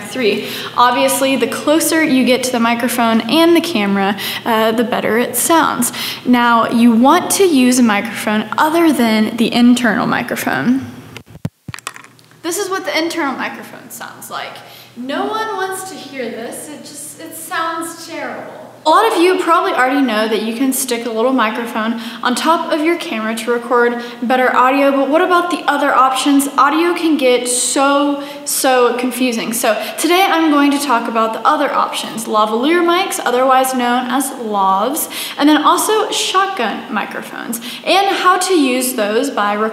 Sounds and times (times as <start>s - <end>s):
Female speech, woman speaking: 0.0s - 10.9s, 12.5s - 39.7s.